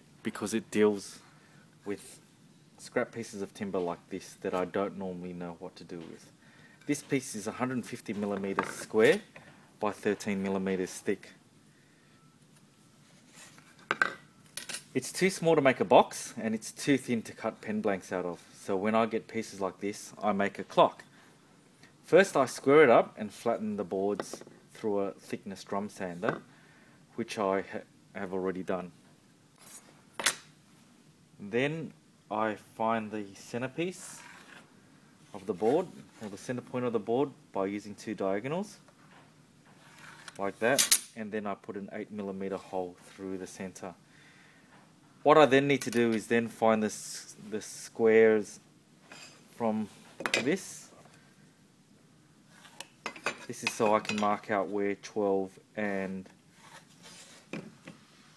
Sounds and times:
Speech: 0.2s - 1.2s, 1.8s - 2.2s, 2.8s - 6.3s, 6.9s - 11.4s, 15.0s - 21.1s, 22.0s - 26.4s, 27.2s - 29.0s, 31.4s - 34.3s, 35.3s - 38.9s, 40.4s - 44.0s, 45.2s - 48.6s, 49.6s - 51.0s, 53.5s - 56.4s.

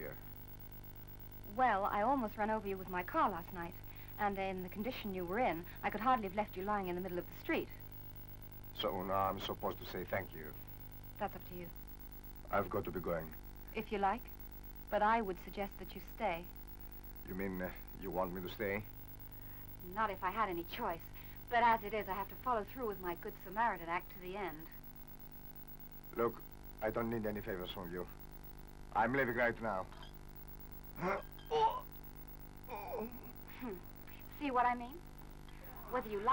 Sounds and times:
Speech: 8.8s - 10.5s, 12.5s - 14.2s, 26.2s - 28.1s, 29.0s - 30.0s.

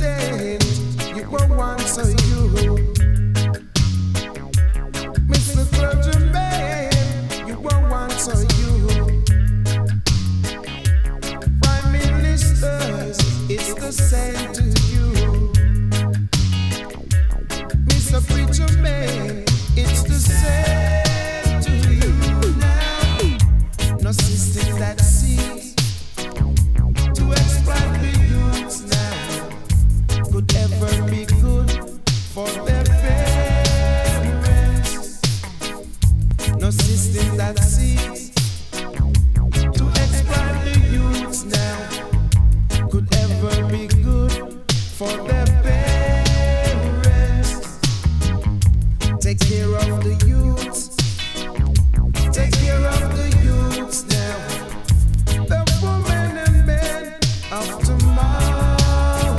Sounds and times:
Reggae: 0.0s - 59.3s.

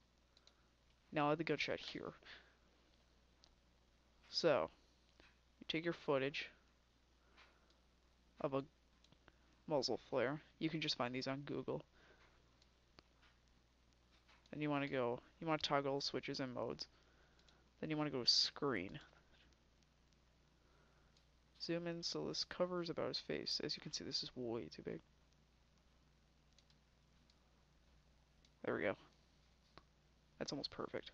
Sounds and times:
Clicking: 0.3s - 1.0s, 9.0s - 9.4s, 17.4s - 17.6s, 21.1s - 21.3s, 26.5s - 27.4s.

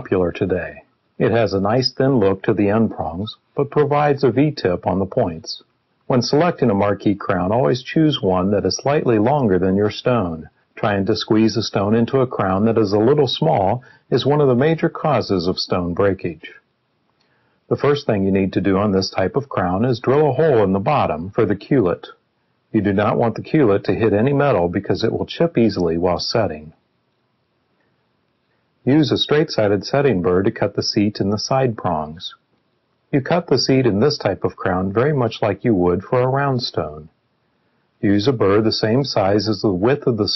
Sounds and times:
Speech: 0.0s - 16.6s, 17.7s - 26.8s, 28.8s - 32.4s, 33.1s - 37.2s, 38.0s - 40.3s.

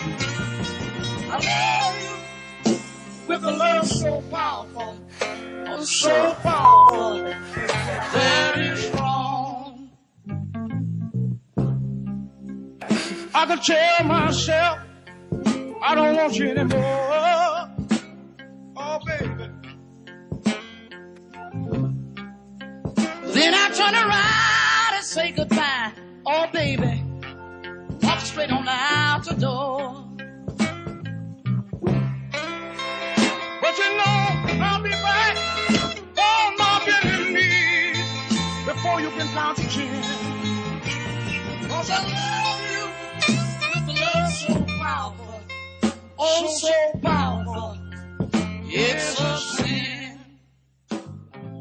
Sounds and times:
Music: 0.0s - 51.6s.

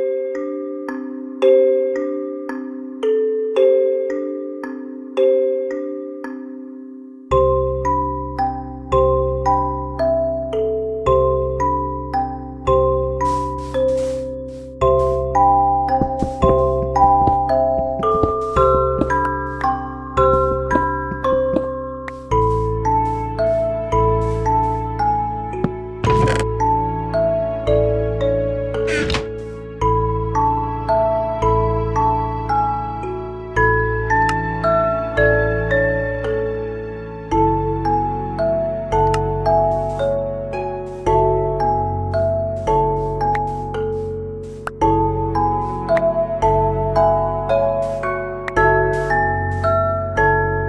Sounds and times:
Music: 0.0s - 50.6s.

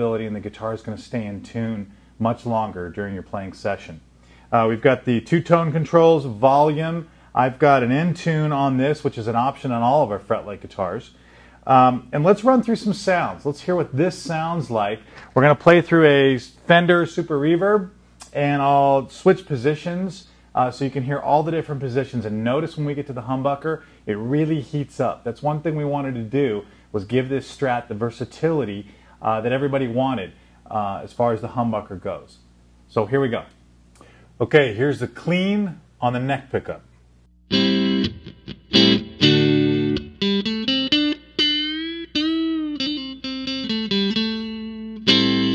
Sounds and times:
Speech: 0.0s - 33.6s, 34.4s - 36.9s.

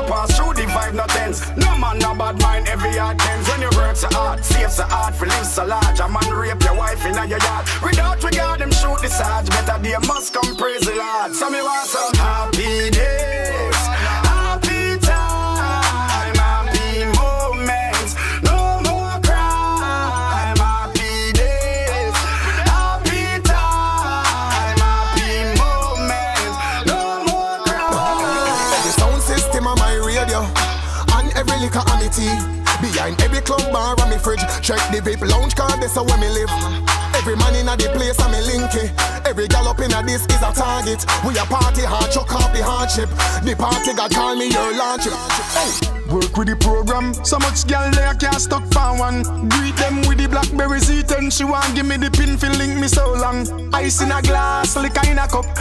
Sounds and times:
Hip hop music: 0.0s - 55.6s.

